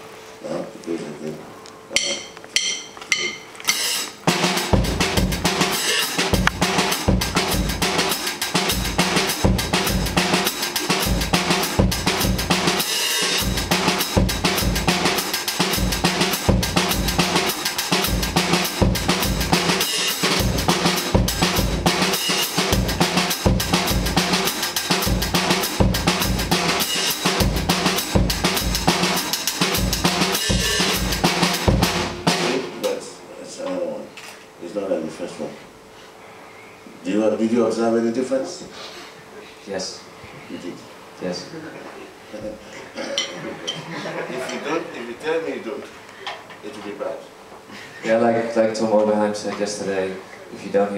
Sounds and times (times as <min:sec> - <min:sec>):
Drum: 0:02.0 - 0:32.9.